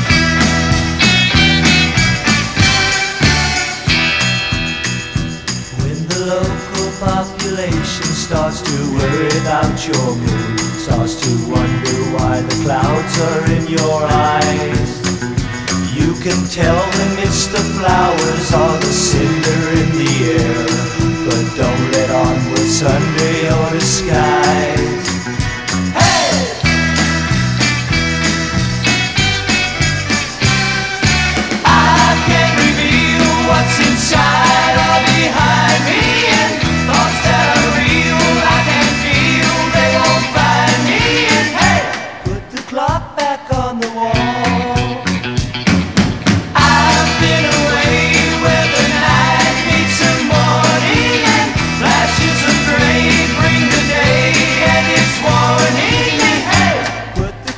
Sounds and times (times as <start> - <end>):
Music: 0.0 - 57.5.